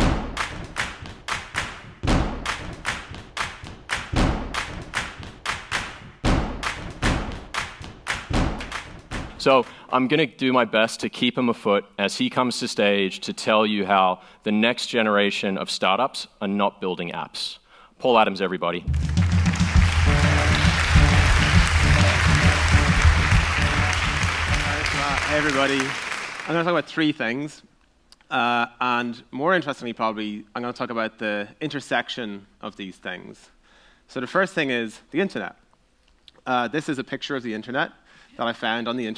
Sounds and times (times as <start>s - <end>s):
Speech: 9.4s - 18.9s, 24.5s - 27.7s, 28.3s - 35.6s, 36.4s - 39.1s.